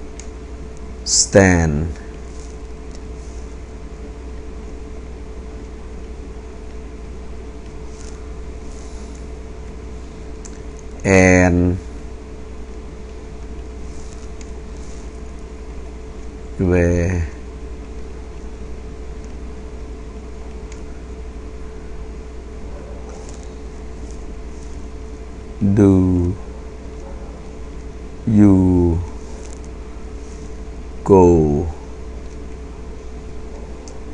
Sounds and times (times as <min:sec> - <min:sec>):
Speech: 0:01.1 - 0:02.0, 0:11.0 - 0:11.8, 0:16.6 - 0:17.4, 0:25.6 - 0:26.4, 0:28.3 - 0:29.1, 0:31.1 - 0:31.8.